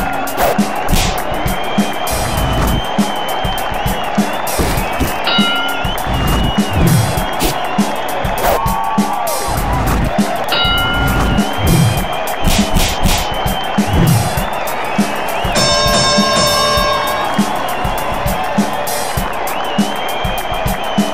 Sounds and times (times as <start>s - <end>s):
Music: 0.0s - 21.1s.